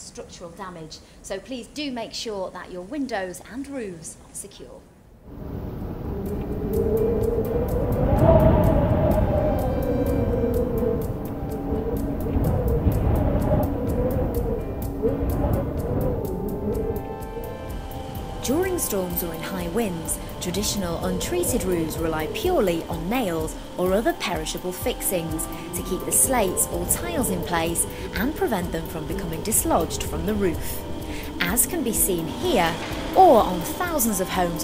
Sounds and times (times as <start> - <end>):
Wind noise (microphone): 5.3 - 17.3
Music: 6.1 - 34.6.